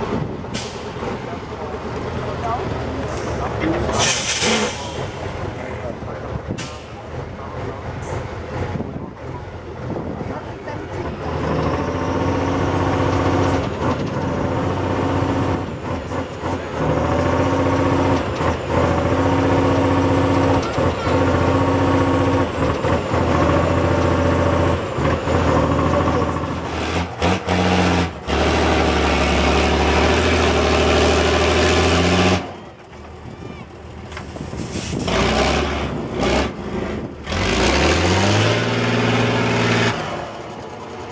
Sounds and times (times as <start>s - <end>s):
Speech: 1.1s - 11.3s.